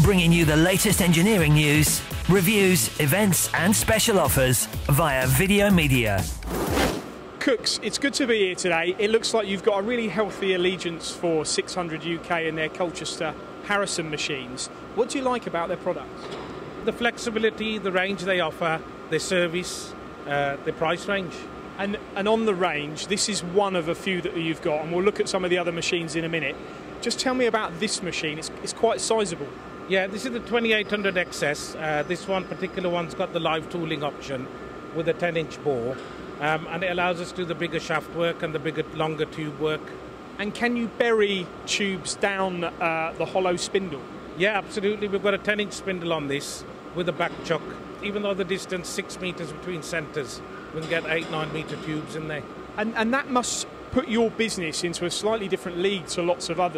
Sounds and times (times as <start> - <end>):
Speech: 0.0 - 6.3, 7.4 - 16.2, 16.8 - 56.7.